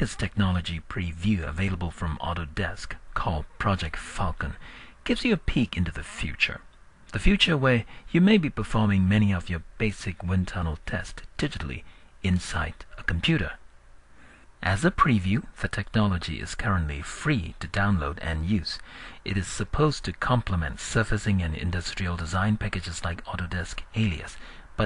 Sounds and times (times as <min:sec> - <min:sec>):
Speech: 0:00.0 - 0:13.6, 0:14.6 - 0:24.8.